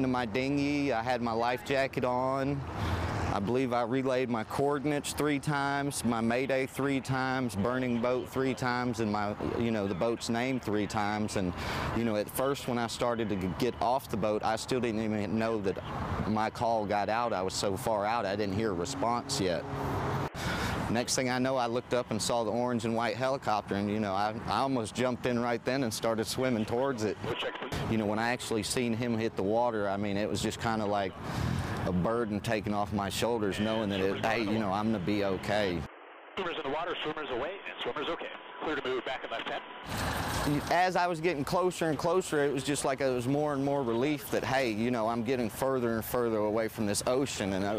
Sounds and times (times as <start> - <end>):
Speech: 0.0 - 2.6, 3.3 - 19.6, 20.9 - 31.2, 31.8 - 39.6, 40.5 - 47.7.